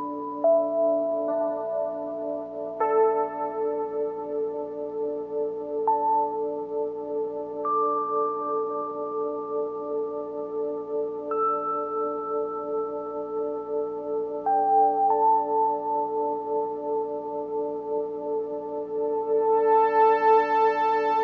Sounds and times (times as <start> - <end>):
Music: 0.0 - 21.2.